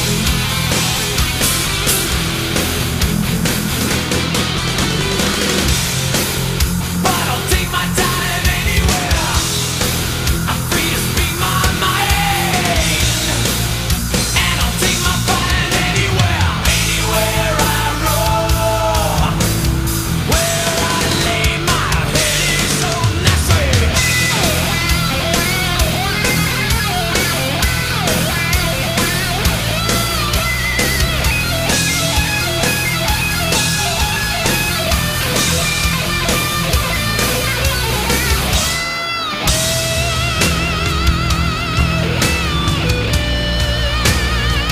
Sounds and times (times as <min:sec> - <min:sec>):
Heavy metal: 0:00.0 - 0:44.7.